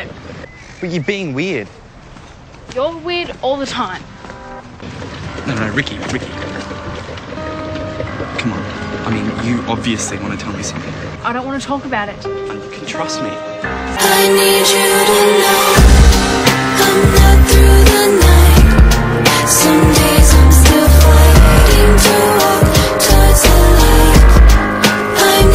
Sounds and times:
Music: 0:03.6 - 0:25.5.

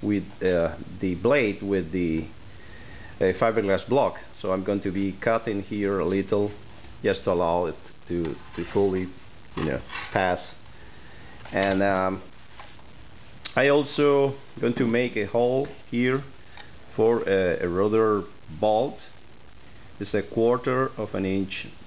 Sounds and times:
Speech: 0:00.0 - 0:02.3, 0:03.2 - 0:10.6, 0:11.5 - 0:12.3, 0:13.5 - 0:16.3, 0:16.9 - 0:19.2, 0:20.0 - 0:21.8.

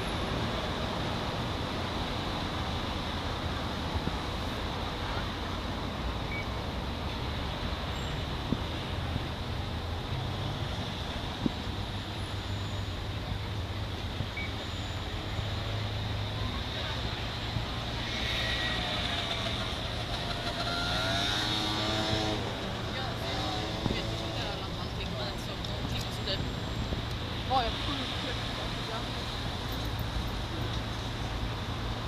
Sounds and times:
Vehicle: 0:00.0 - 0:32.0.

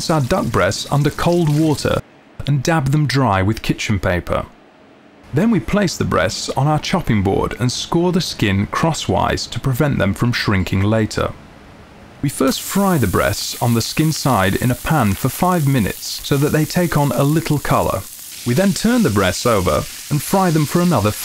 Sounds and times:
Speech: 0:00.0 - 0:04.6, 0:05.3 - 0:11.4, 0:12.2 - 0:21.2.

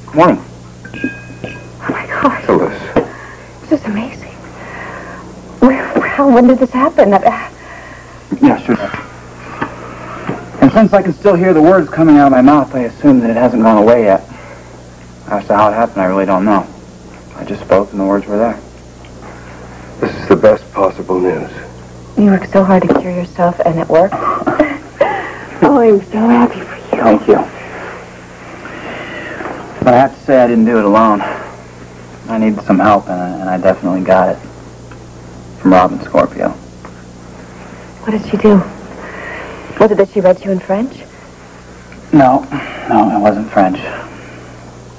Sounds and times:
Narration, monologue: 0:00.0 - 0:24.1, 0:24.8 - 0:44.9
Male speech, man speaking: 0:00.1 - 0:00.5, 0:02.2 - 0:03.0, 0:08.3 - 0:09.0, 0:10.6 - 0:14.3, 0:15.3 - 0:16.7, 0:17.3 - 0:18.7, 0:20.0 - 0:21.7, 0:29.8 - 0:31.4, 0:32.3 - 0:34.4, 0:35.6 - 0:36.6, 0:42.1 - 0:44.1.

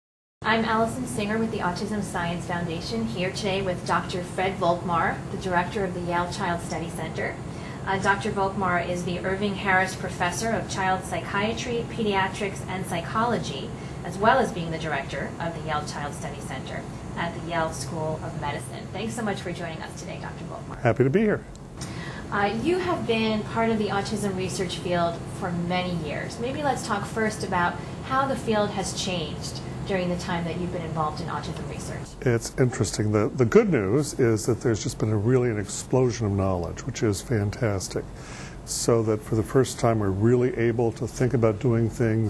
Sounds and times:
Speech: 0:00.4 - 0:21.5, 0:22.3 - 0:38.0, 0:38.7 - 0:42.2.

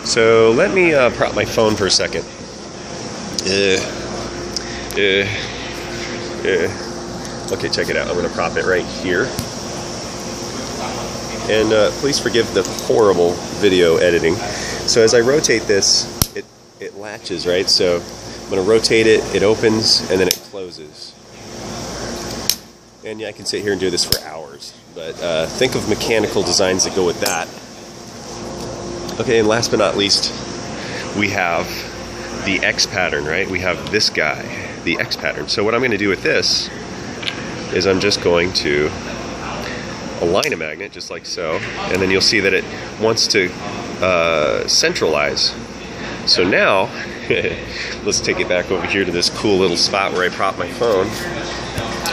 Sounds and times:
Speech: 0:00.0 - 0:02.3, 0:03.4 - 0:04.0, 0:04.9 - 0:05.5, 0:06.4 - 0:06.8, 0:07.5 - 0:09.4, 0:10.8 - 0:21.2, 0:23.0 - 0:27.6, 0:29.1 - 0:30.4, 0:31.1 - 0:36.7, 0:37.7 - 0:52.1.

